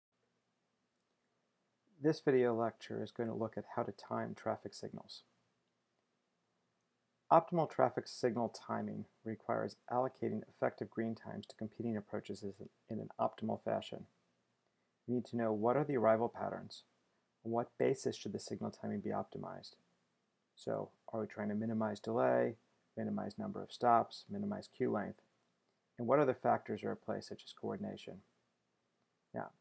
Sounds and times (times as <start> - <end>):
Speech: 2.0 - 5.3, 7.3 - 14.1, 15.1 - 16.9, 17.5 - 19.8, 20.6 - 25.2, 26.0 - 28.3, 29.4 - 29.6.